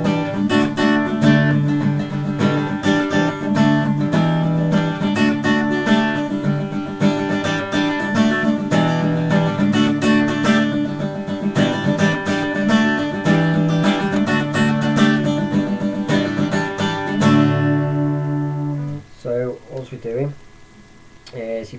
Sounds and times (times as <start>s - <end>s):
Acoustic guitar: 0.0s - 19.1s
Strum: 0.0s - 20.2s
Speech: 19.1s - 20.4s, 21.3s - 21.7s.